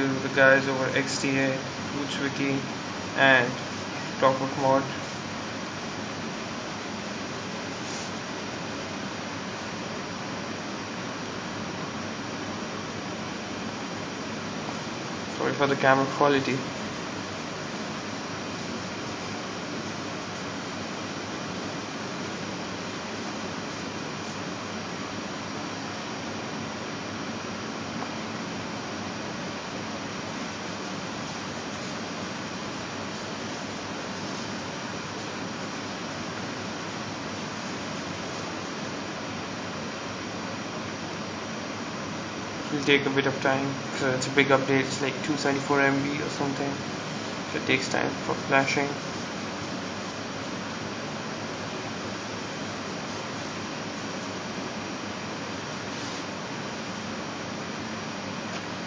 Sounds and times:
Speech: 0:00.0 - 0:03.6, 0:04.2 - 0:05.0, 0:15.3 - 0:16.7, 0:42.7 - 0:46.8, 0:47.5 - 0:49.0
Air conditioning: 0:00.0 - 0:58.8.

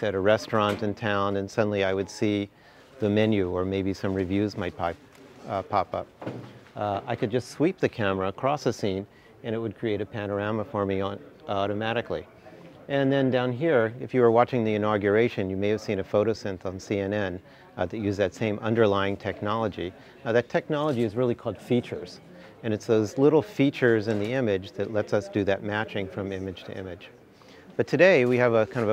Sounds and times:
Speech: 0:00.0 - 0:06.1, 0:06.8 - 0:28.9.

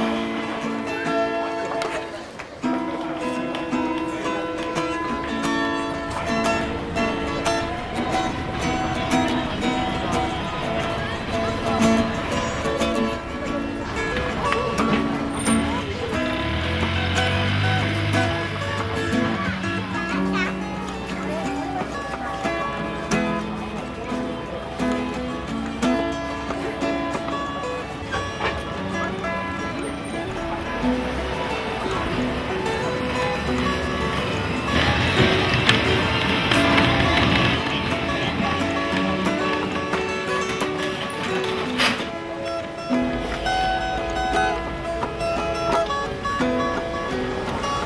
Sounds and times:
Speech: 0:00.0 - 0:42.9
Music: 0:00.0 - 0:47.8.

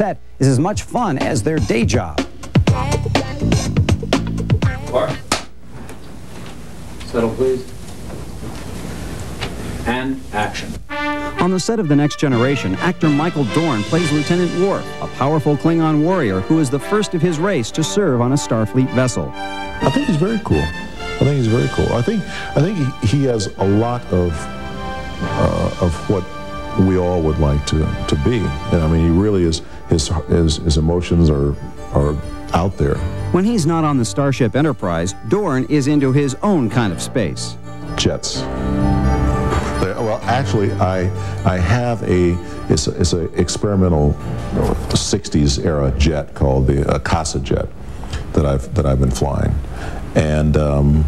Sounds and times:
Speech: 0:00.0 - 0:03.5, 0:11.4 - 0:24.4, 0:25.3 - 0:38.4, 0:39.8 - 0:47.7, 0:48.3 - 0:49.6, 0:50.2 - 0:51.0
Music: 0:00.8 - 0:05.5, 0:10.8 - 0:51.0.

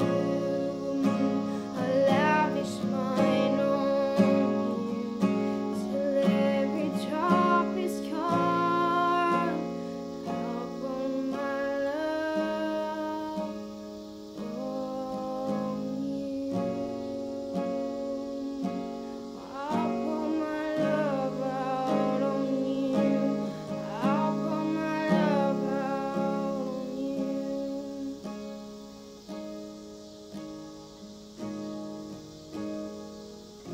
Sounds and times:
Singing: 0:00.0 - 0:13.8, 0:14.4 - 0:28.4
Acoustic guitar: 0:00.0 - 0:33.7.

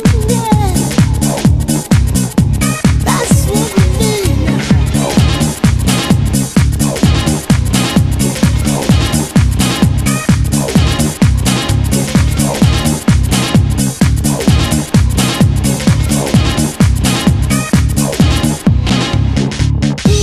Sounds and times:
Disco: 0:00.0 - 0:20.2
Electronic music: 0:00.0 - 0:20.2.

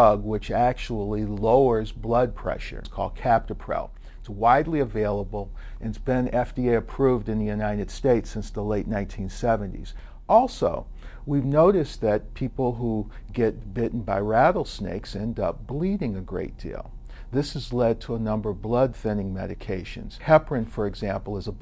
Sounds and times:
Speech: 0:00.0 - 0:21.6.

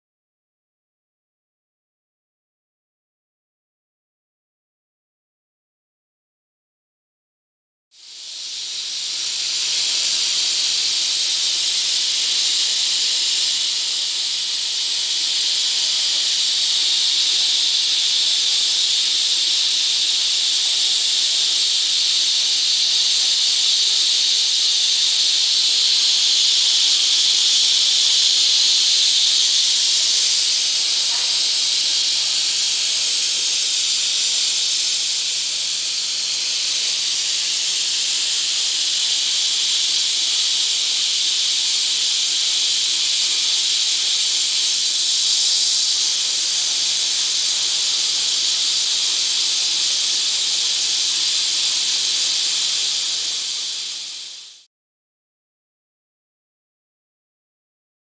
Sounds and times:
Spray: 0:08.0 - 0:54.7.

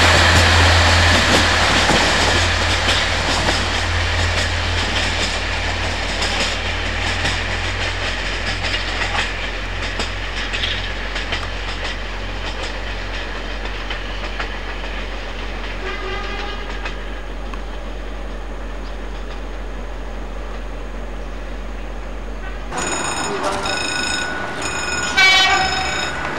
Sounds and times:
Railroad car, train wagon: 0:00.0 - 0:26.3
Train: 0:00.0 - 0:26.3.

